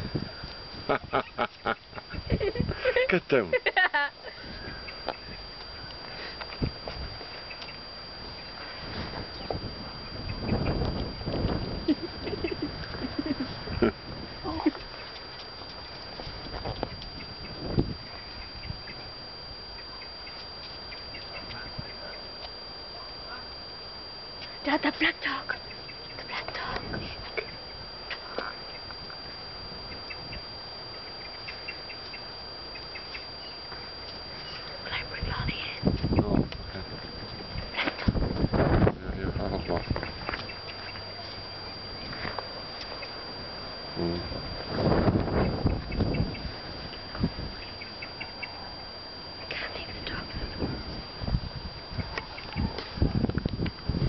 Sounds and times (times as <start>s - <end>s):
Speech: 38.9s - 39.8s.